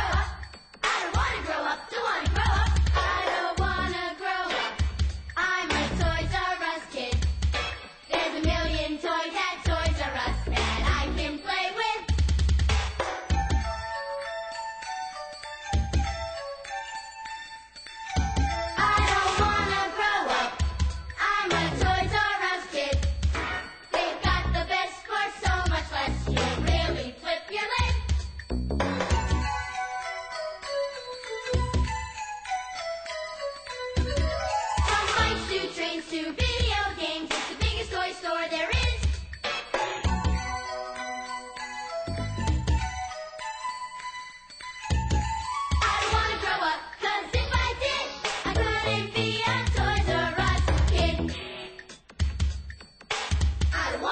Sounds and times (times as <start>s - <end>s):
Music: 0.0s - 54.1s.